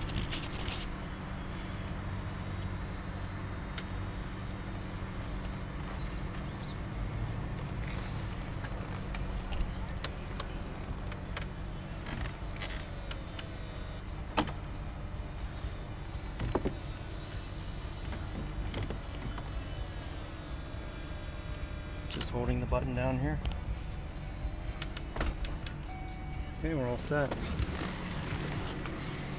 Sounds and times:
Car: 0.0s - 29.3s.

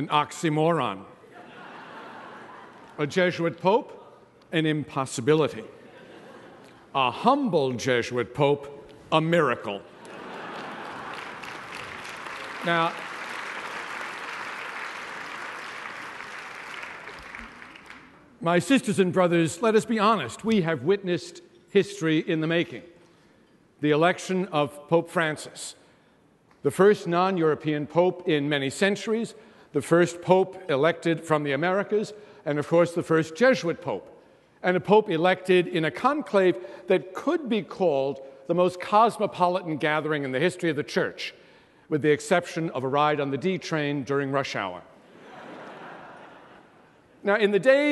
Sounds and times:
Male speech, man speaking: 0.0s - 1.1s, 3.0s - 5.7s, 7.0s - 9.8s, 12.6s - 13.0s, 18.4s - 22.9s, 23.8s - 25.8s, 26.6s - 44.9s, 47.2s - 47.9s
Narration, monologue: 0.0s - 14.5s, 18.2s - 47.9s.

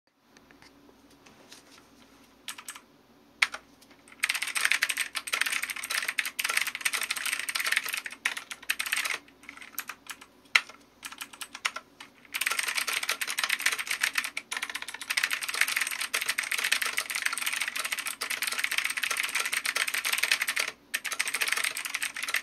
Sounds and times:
Computer keyboard: 2.5s - 2.8s, 3.4s - 22.4s.

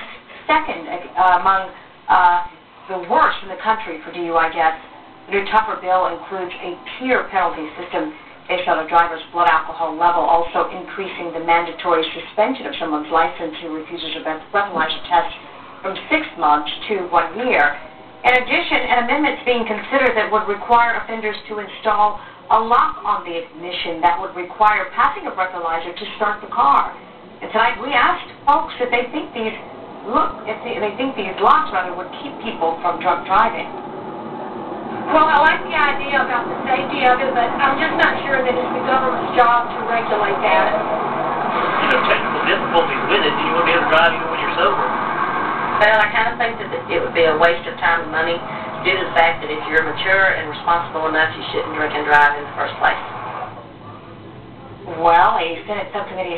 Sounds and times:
Speech: 0.0s - 33.7s, 35.1s - 40.8s, 41.6s - 45.0s, 45.8s - 53.0s, 54.9s - 56.3s.

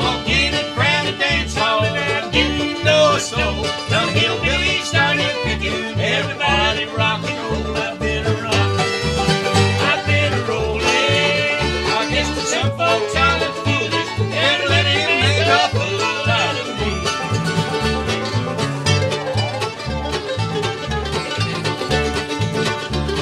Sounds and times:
Banjo: 0.0s - 23.2s
Country: 0.0s - 23.2s.

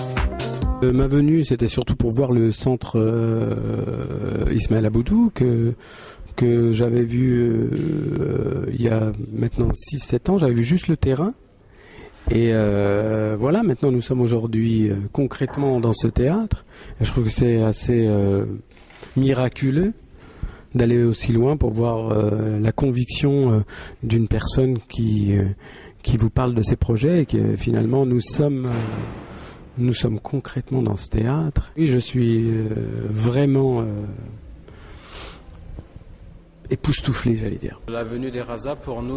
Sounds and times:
Speech: 0.8s - 5.8s, 6.4s - 11.4s, 12.3s - 18.6s, 19.2s - 20.0s, 20.7s - 29.0s, 29.8s - 34.4s, 36.7s - 39.1s.

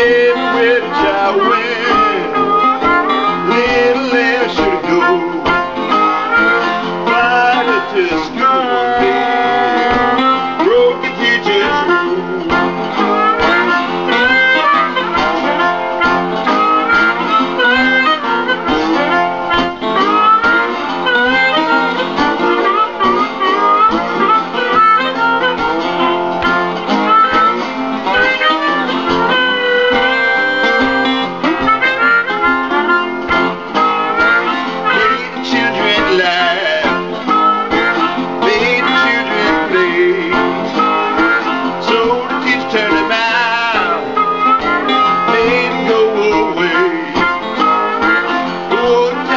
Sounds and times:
Guitar: 0.0s - 49.3s
Harmonica: 0.0s - 49.3s.

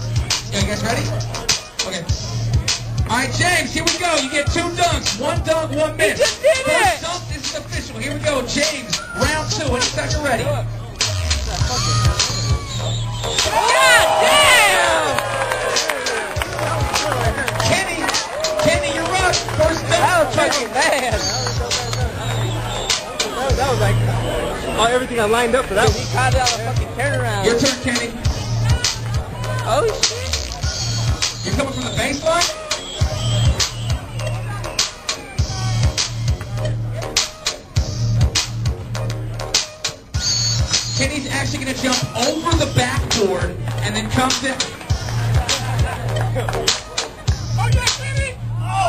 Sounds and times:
Music: 0.0s - 48.8s.

